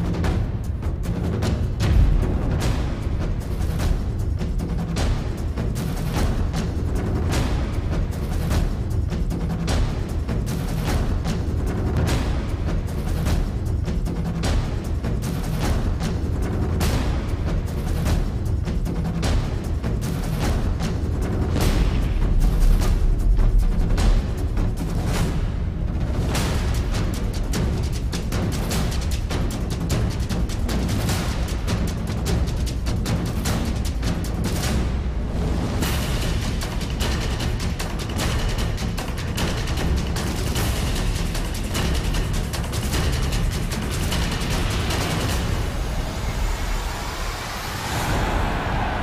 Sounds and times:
Music: 0.0 - 49.0.

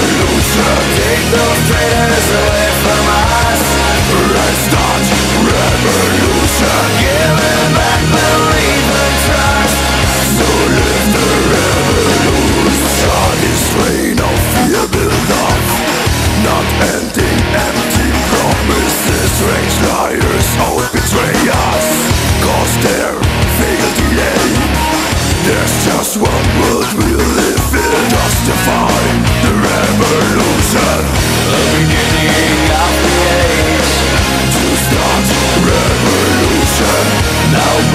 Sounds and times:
Angry music: 0.0 - 37.9
Heavy metal: 0.0 - 37.9.

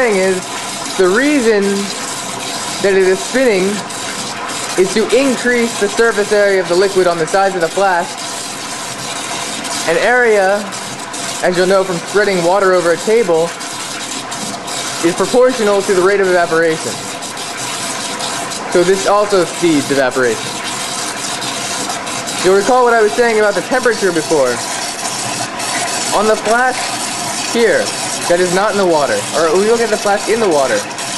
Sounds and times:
Speech: 0.0 - 0.4, 1.0 - 2.0, 2.8 - 3.8, 4.8 - 8.1, 9.9 - 10.7, 11.4 - 13.6, 15.0 - 17.0, 18.7 - 20.4, 22.4 - 24.6, 26.1 - 26.9, 27.5 - 30.9.

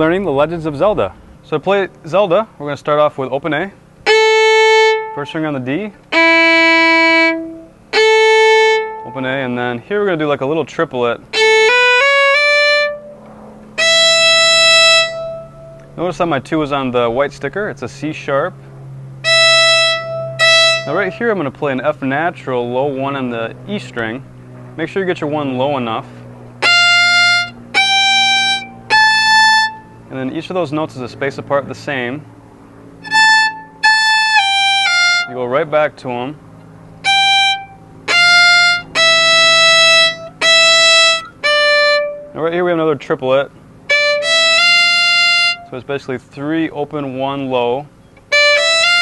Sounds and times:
Speech: 0.0 - 3.8, 5.2 - 6.0, 9.0 - 11.2, 16.0 - 18.6, 20.9 - 26.2, 30.1 - 32.3, 35.3 - 36.4, 42.4 - 43.5, 45.7 - 47.9
Violin, fiddle: 4.0 - 5.5, 6.1 - 9.4, 11.3 - 13.2, 13.8 - 16.4, 19.2 - 21.5, 26.6 - 29.9, 33.0 - 35.4, 37.0 - 42.5, 43.9 - 45.8, 48.3 - 49.0.

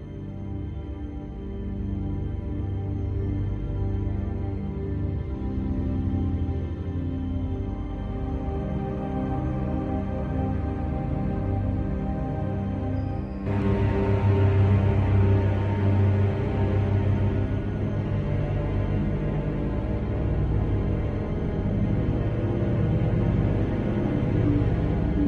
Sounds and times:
Music: 0.0 - 25.2.

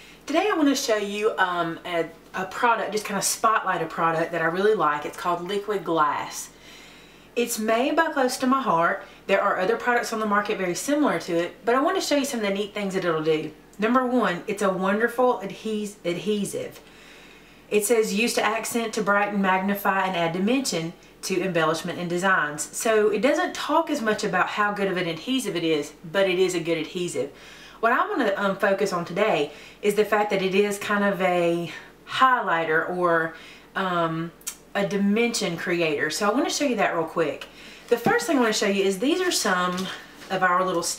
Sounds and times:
Speech: 0.3 - 6.6, 7.4 - 16.8, 17.7 - 40.9.

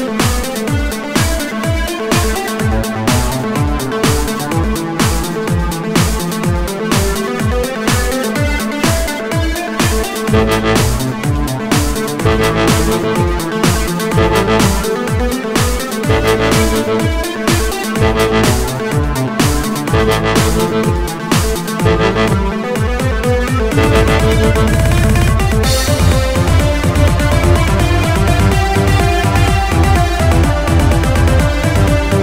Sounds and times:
Dubstep: 2.4 - 6.5, 10.2 - 22.9, 23.5 - 28.5.

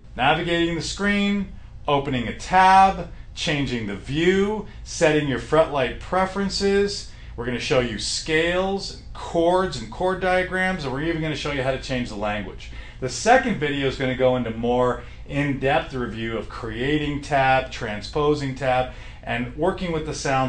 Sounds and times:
Speech: 0.2 - 20.4.

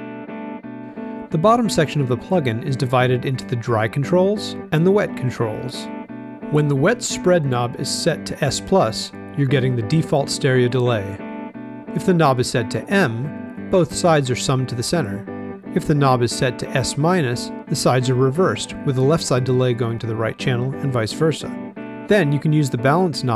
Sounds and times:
Speech: 1.3 - 5.9, 6.5 - 11.2, 12.0 - 15.2, 15.8 - 23.3.

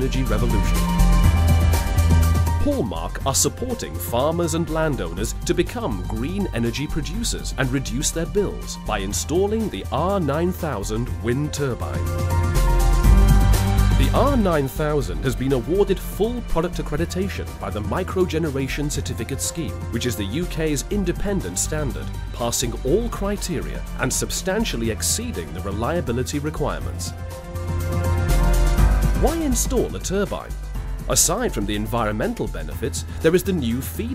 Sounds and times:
Speech: 0.0 - 0.8, 2.6 - 12.0, 14.0 - 27.1, 29.2 - 30.5, 31.1 - 34.1
Music: 0.0 - 34.1.

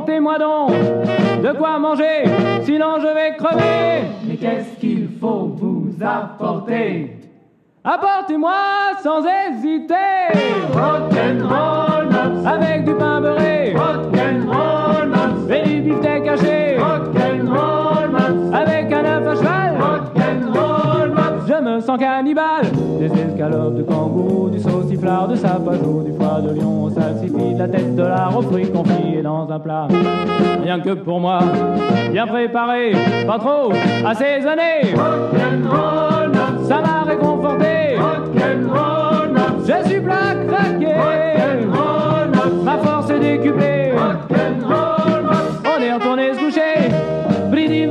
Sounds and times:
Rock and roll: 0.0 - 4.6, 10.2 - 21.7, 22.4 - 47.9.

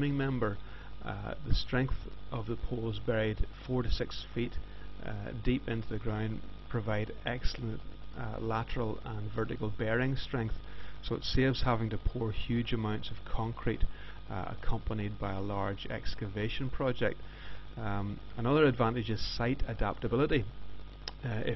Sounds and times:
Speech: 0.0 - 17.2, 17.8 - 21.5.

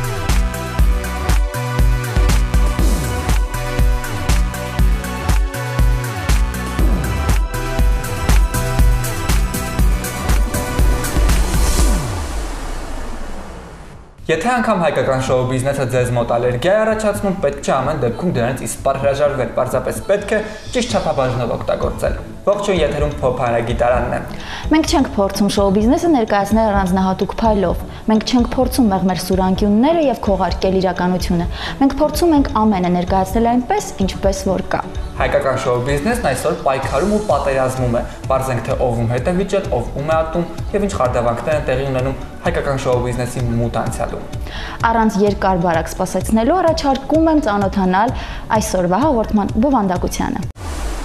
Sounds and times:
Music: 0.0 - 50.6
Speech: 14.3 - 50.5.

